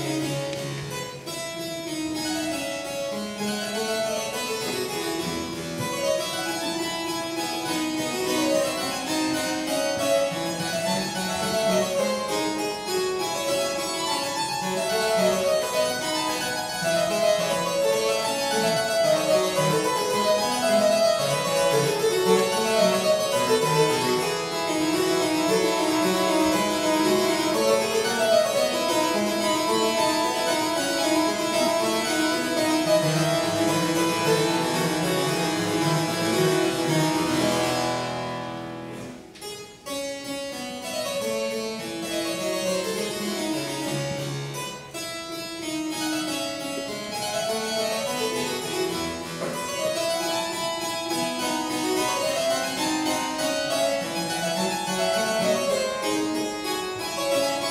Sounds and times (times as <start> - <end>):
Harpsichord: 0.0 - 57.7.